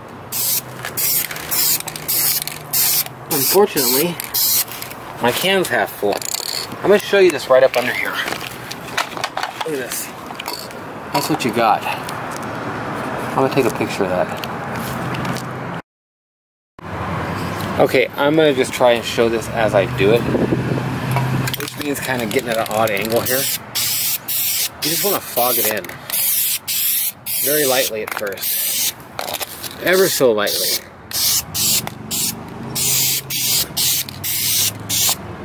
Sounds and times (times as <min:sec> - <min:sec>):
Traffic noise, roadway noise: 0:00.0 - 0:15.8, 0:16.8 - 0:35.4
Speech: 0:03.3 - 0:04.2, 0:05.2 - 0:06.2, 0:06.8 - 0:08.3, 0:09.6 - 0:10.1, 0:11.1 - 0:12.0, 0:13.4 - 0:14.4, 0:17.8 - 0:20.3, 0:21.6 - 0:23.5, 0:24.8 - 0:25.9, 0:27.4 - 0:28.4, 0:29.2 - 0:30.8.